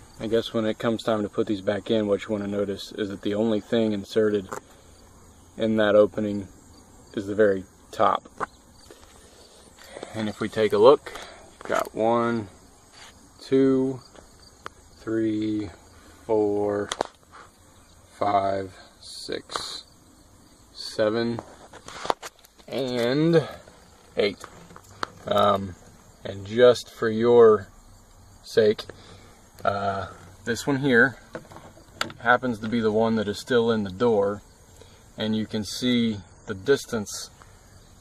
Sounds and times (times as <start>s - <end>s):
Speech: 0.2s - 4.6s, 5.6s - 6.5s, 7.1s - 8.3s, 10.0s - 12.6s, 13.4s - 14.0s, 15.0s - 17.0s, 18.2s - 19.9s, 20.8s - 21.5s, 22.7s - 23.6s, 24.2s - 24.4s, 25.2s - 27.7s, 28.4s - 28.9s, 29.6s - 31.2s, 32.2s - 34.4s, 35.2s - 37.4s.